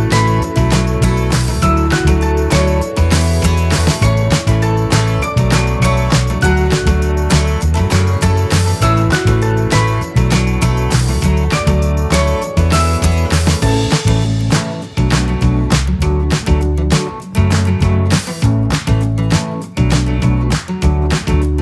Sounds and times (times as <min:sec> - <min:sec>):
Music: 0:00.0 - 0:21.6.